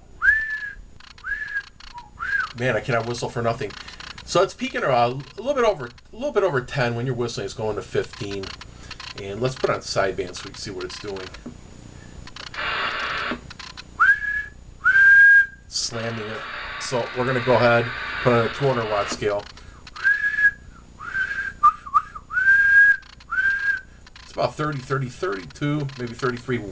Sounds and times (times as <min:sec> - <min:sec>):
Whistling: 0:00.2 - 0:03.1, 0:14.0 - 0:15.7, 0:20.0 - 0:24.0.